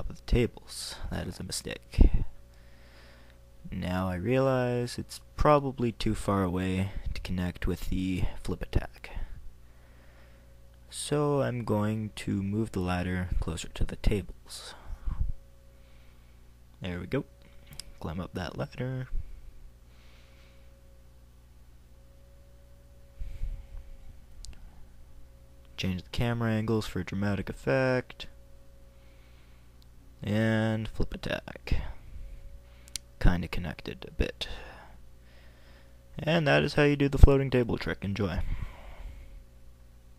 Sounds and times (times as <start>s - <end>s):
Speech: 0.0s - 2.3s, 3.6s - 9.3s, 10.9s - 14.8s, 16.8s - 17.3s, 18.0s - 19.2s, 25.8s - 28.3s, 30.2s - 32.0s, 33.2s - 34.6s, 36.2s - 38.5s.